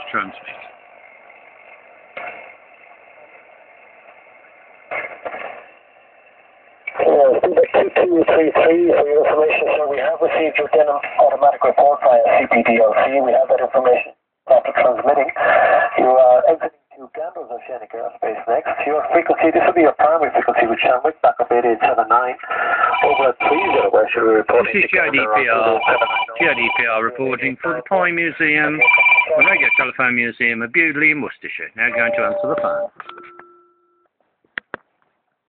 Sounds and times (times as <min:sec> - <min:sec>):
Speech: 0:00.0 - 0:00.7, 0:07.0 - 0:32.8.